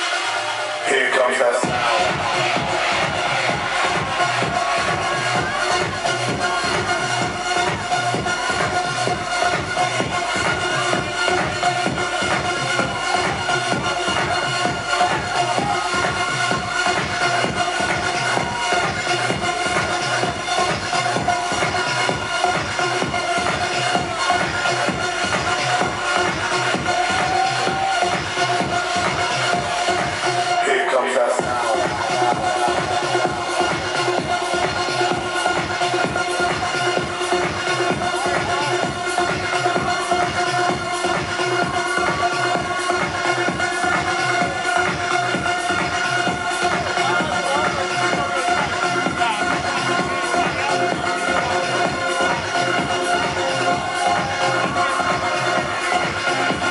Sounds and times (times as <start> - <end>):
Music: 0.0 - 56.7.